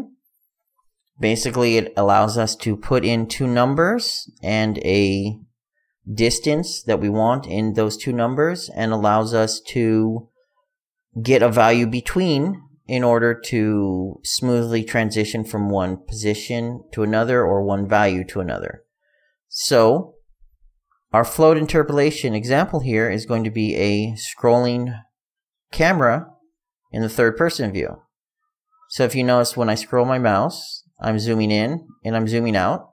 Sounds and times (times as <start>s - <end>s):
Speech: 1.2s - 10.4s, 11.1s - 18.9s, 19.5s - 20.2s, 21.1s - 32.9s.